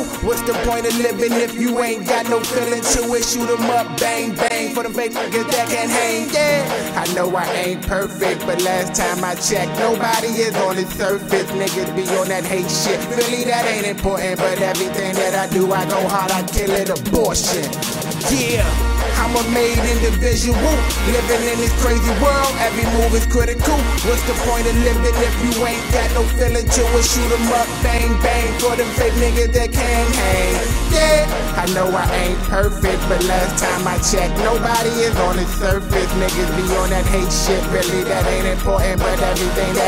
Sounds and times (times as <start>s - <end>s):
Independent music: 0.0s - 39.8s.